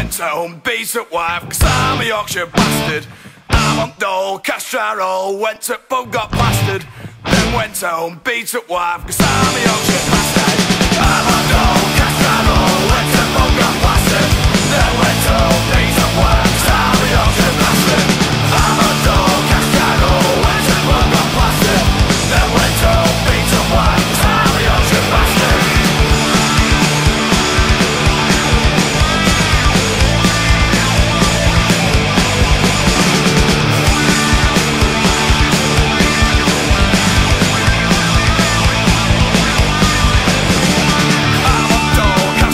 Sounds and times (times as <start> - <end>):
Music: 0.0 - 0.3, 1.4 - 4.0, 6.2 - 7.8, 9.0 - 42.5.